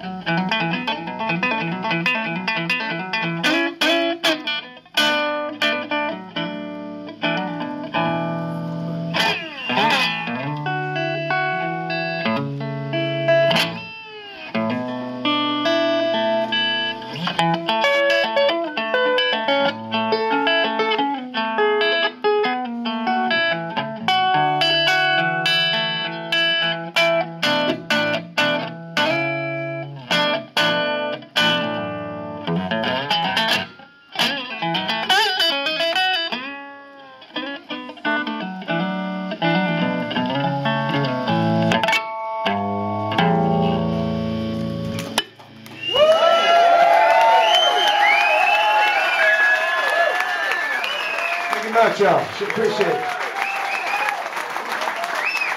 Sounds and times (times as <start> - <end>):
Tapping (guitar technique): 0.1 - 45.7.